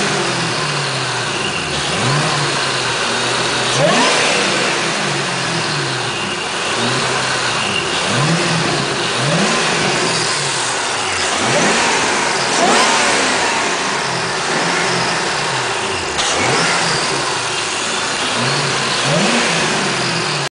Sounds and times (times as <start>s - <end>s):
Medium engine (mid frequency): 0.0s - 20.5s
Vehicle: 0.0s - 20.5s
Accelerating, revving, vroom: 1.7s - 17.4s, 18.2s - 20.5s.